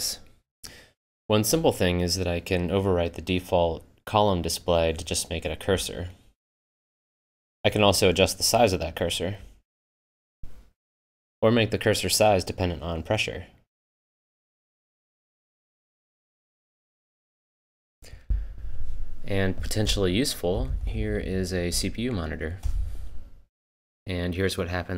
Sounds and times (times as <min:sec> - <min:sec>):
Speech: 0:00.0 - 0:00.3, 0:01.3 - 0:06.2, 0:07.7 - 0:09.5, 0:11.4 - 0:13.6, 0:19.3 - 0:22.6, 0:24.1 - 0:24.9.